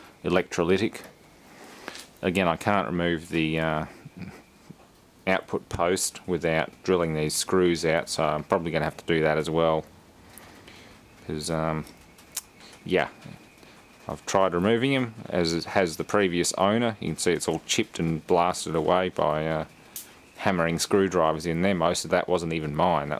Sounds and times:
Speech: 0.2 - 1.1, 2.2 - 4.4, 5.3 - 9.9, 11.2 - 11.9, 12.8 - 13.4, 14.1 - 19.7, 20.4 - 23.1.

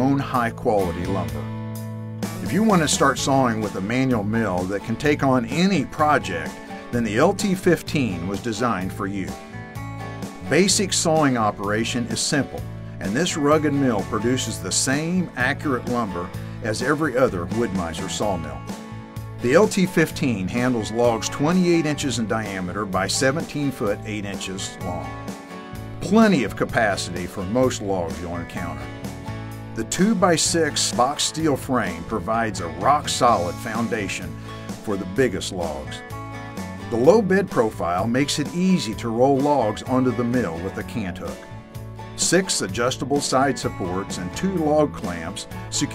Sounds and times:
Speech: 0.0 - 1.5, 2.4 - 9.4, 10.4 - 18.6, 19.4 - 25.2, 26.0 - 28.9, 29.8 - 36.0, 36.9 - 41.5, 42.2 - 45.9
Music: 0.0 - 45.9.

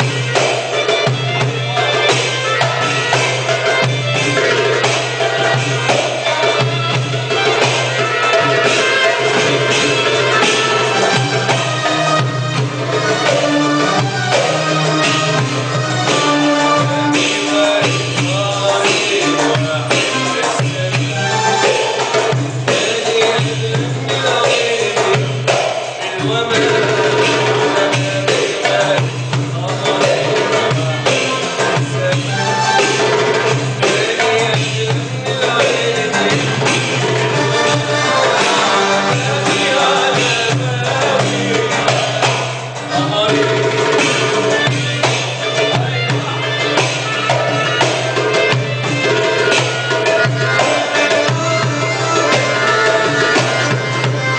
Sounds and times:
Music: 0.0 - 54.3.

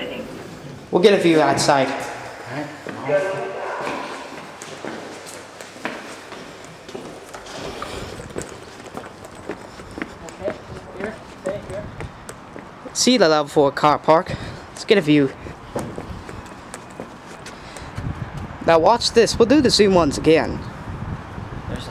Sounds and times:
Speech: 1.0 - 4.1.

